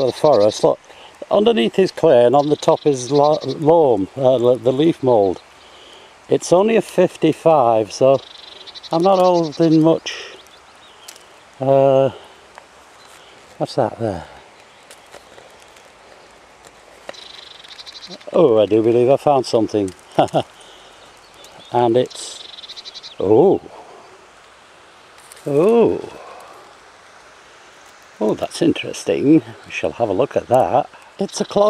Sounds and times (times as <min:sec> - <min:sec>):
Speech: 0:00.0 - 0:05.4, 0:06.3 - 0:08.2, 0:08.9 - 0:10.4, 0:11.6 - 0:12.2, 0:13.6 - 0:14.4, 0:18.1 - 0:20.4, 0:21.6 - 0:22.4, 0:23.2 - 0:23.7, 0:25.4 - 0:26.2, 0:28.2 - 0:31.7
Environmental noise: 0:00.0 - 0:31.7.